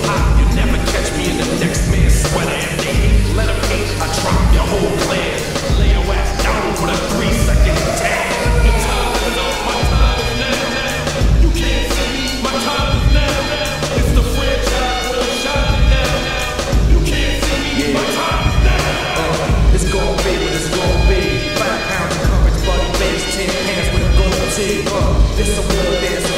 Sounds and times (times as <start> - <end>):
Music: 0.0 - 26.3.